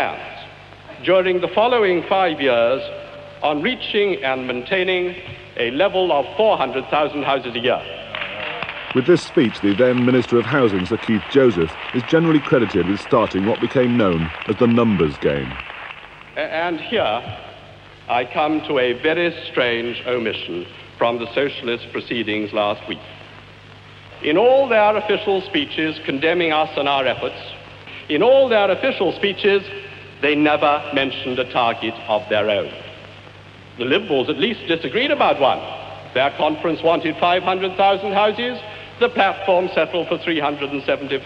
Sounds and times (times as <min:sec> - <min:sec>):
Narration, monologue: 0:00.0 - 0:08.2, 0:08.8 - 0:41.2
Male speech, man speaking: 0:00.0 - 0:15.6, 0:16.4 - 0:17.5, 0:18.1 - 0:23.2, 0:24.2 - 0:32.9, 0:33.8 - 0:41.2.